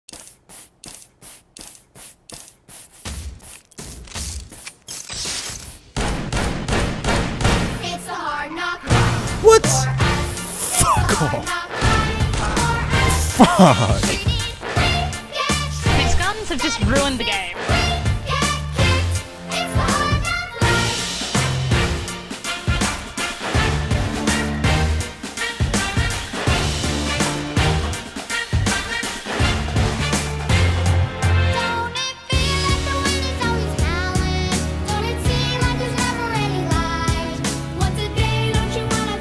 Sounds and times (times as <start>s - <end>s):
Music: 6.0s - 10.6s, 11.5s - 39.2s.